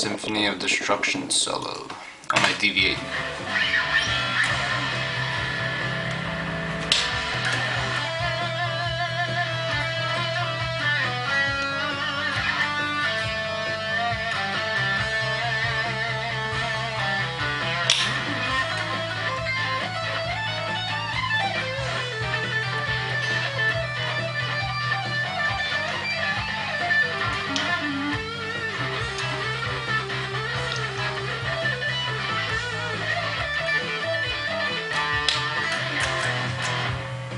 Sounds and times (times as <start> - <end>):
Electric guitar: 2.3 - 37.3.